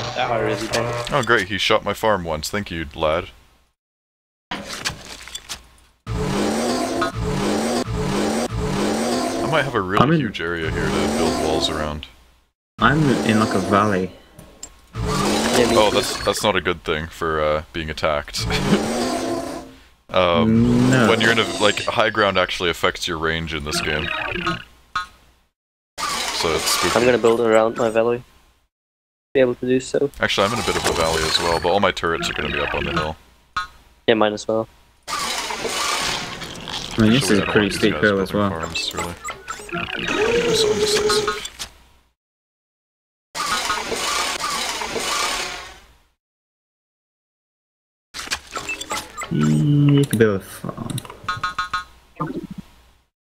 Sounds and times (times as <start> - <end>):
Speech: 0.0 - 3.4, 9.4 - 12.1, 12.8 - 14.1, 15.5 - 18.6, 20.1 - 24.1, 26.4 - 28.2, 29.4 - 33.2, 34.1 - 34.7, 37.0 - 39.2, 49.3 - 51.0.